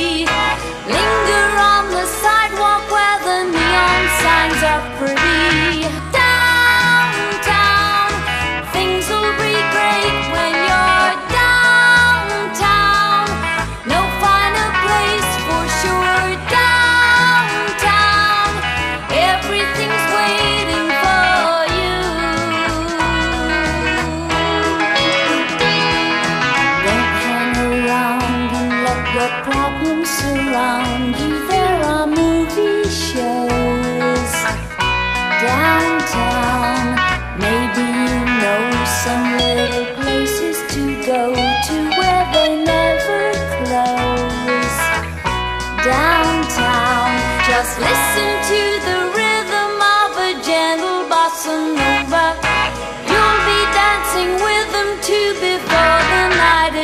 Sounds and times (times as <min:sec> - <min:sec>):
Steel guitar, slide guitar: 0:00.0 - 0:56.8.